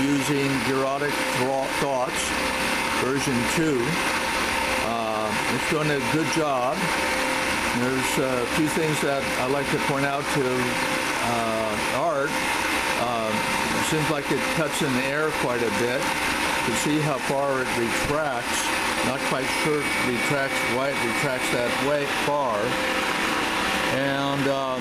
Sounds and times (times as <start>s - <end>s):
Speech: 0.0s - 2.3s, 3.0s - 4.0s, 4.8s - 6.9s, 7.8s - 12.4s, 13.0s - 16.1s, 16.7s - 22.8s, 23.9s - 24.8s
Power tool: 0.0s - 24.8s.